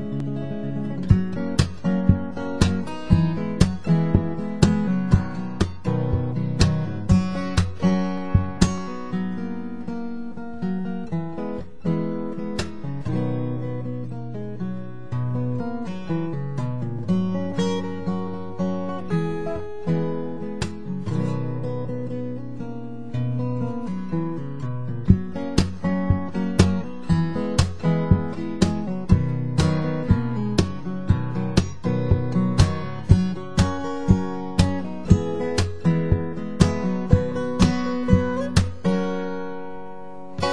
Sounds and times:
Acoustic guitar: 0:00.0 - 0:40.5
Strum: 0:00.0 - 0:40.5.

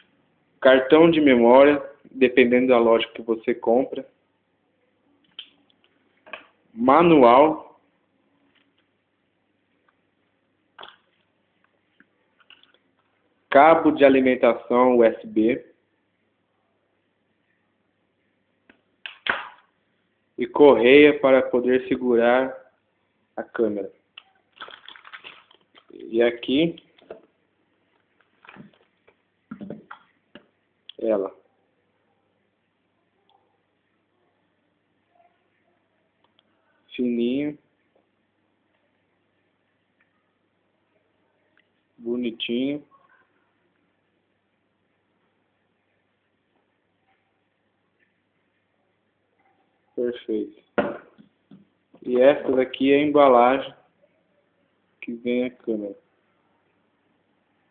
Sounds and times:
Speech: 0:00.6 - 0:04.1, 0:06.8 - 0:07.8, 0:13.5 - 0:15.7, 0:20.4 - 0:22.7, 0:23.4 - 0:24.0, 0:25.9 - 0:26.9, 0:30.9 - 0:31.4, 0:36.8 - 0:37.6, 0:42.0 - 0:43.0, 0:50.0 - 0:50.6, 0:52.0 - 0:53.9, 0:55.0 - 0:56.0.

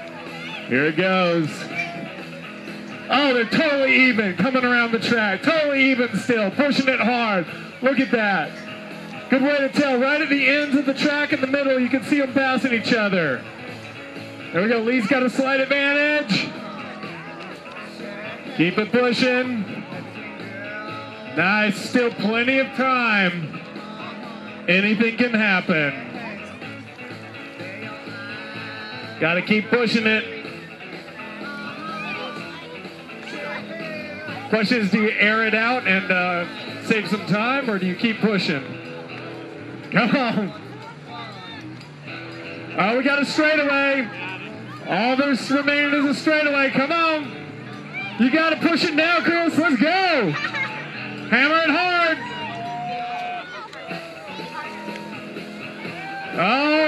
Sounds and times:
Music: 0:00.0 - 0:56.8.

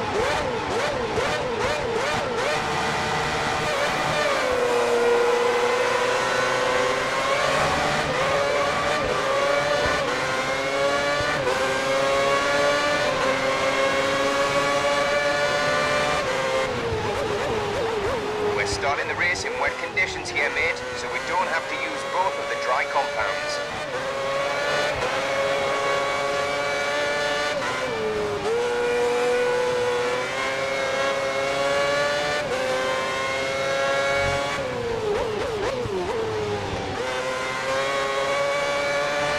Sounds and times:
Speech: 0:18.6 - 0:23.6.

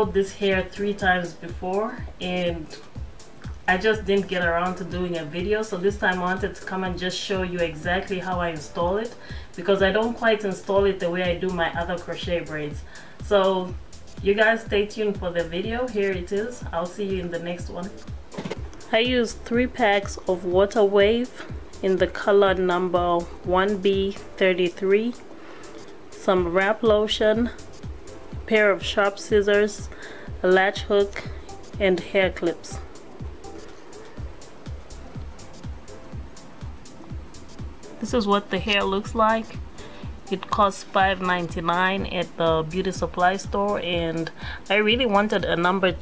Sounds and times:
Speech: 0:00.0 - 0:02.8, 0:03.7 - 0:18.0, 0:18.9 - 0:25.2, 0:26.2 - 0:27.6, 0:28.5 - 0:32.8, 0:38.0 - 0:39.6, 0:40.3 - 0:46.0
Music: 0:00.0 - 0:46.0.

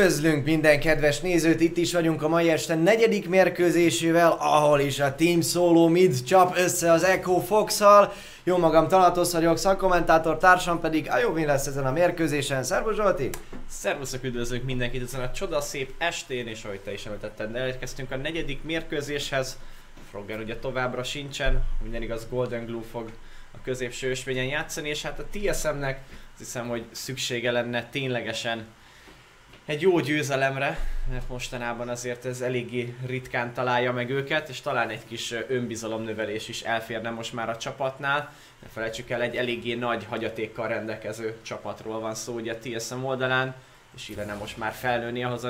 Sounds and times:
Speech: 0:00.0 - 0:28.7, 0:29.7 - 0:45.4.

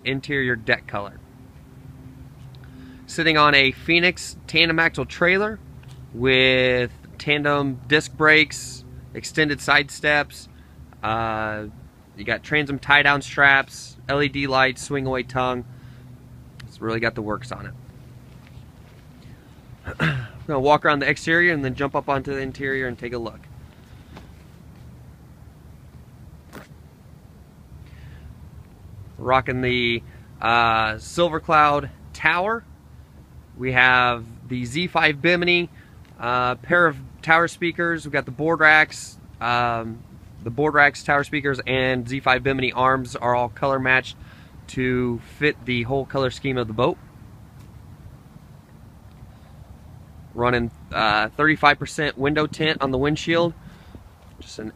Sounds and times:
Speech: 0:00.0 - 0:01.2, 0:03.1 - 0:15.6, 0:16.6 - 0:17.8, 0:20.0 - 0:23.5, 0:29.2 - 0:32.7, 0:33.6 - 0:47.0, 0:50.3 - 0:53.6, 0:54.4 - 0:54.7.

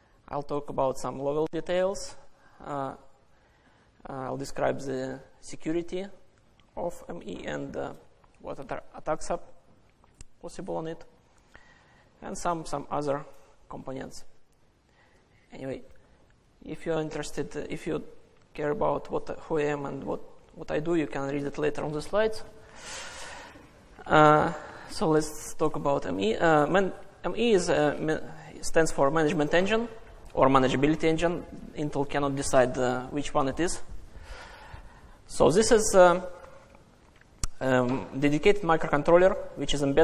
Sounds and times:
Speech: 0:00.3 - 0:03.1, 0:04.0 - 0:06.2, 0:06.8 - 0:09.6, 0:10.4 - 0:11.1, 0:12.2 - 0:14.4, 0:15.5 - 0:16.0, 0:16.6 - 0:22.6, 0:24.0 - 0:33.9, 0:35.3 - 0:36.4, 0:37.5 - 0:40.0.

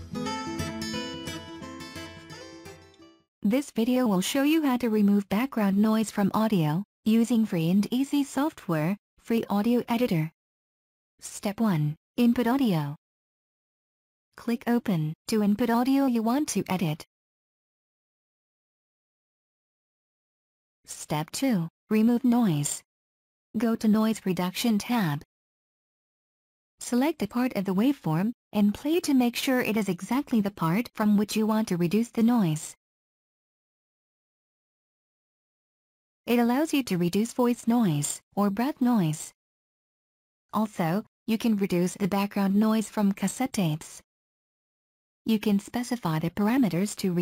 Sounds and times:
Speech: 0:03.4 - 0:10.4, 0:11.2 - 0:13.0, 0:14.4 - 0:17.1, 0:20.9 - 0:22.9, 0:23.6 - 0:25.3, 0:26.8 - 0:32.8, 0:36.3 - 0:39.4, 0:40.6 - 0:44.0, 0:45.3 - 0:47.2.

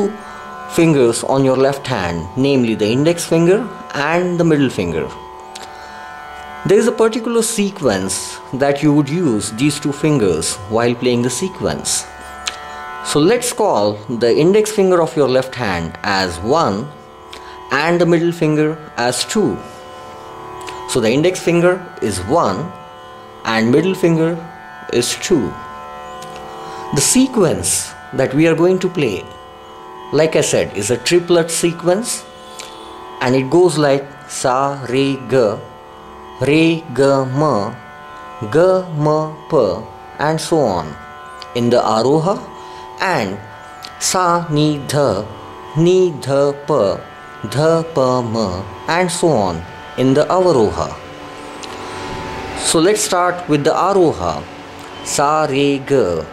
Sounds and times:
Speech: 0:00.0 - 0:05.2, 0:06.7 - 0:12.1, 0:13.1 - 0:17.0, 0:17.7 - 0:19.7, 0:20.9 - 0:22.8, 0:23.5 - 0:25.7, 0:26.9 - 0:29.4, 0:30.1 - 0:32.3, 0:33.2 - 0:35.7, 0:36.4 - 0:37.8, 0:38.4 - 0:51.0, 0:52.6 - 0:56.3
Music: 0:00.0 - 0:56.3.

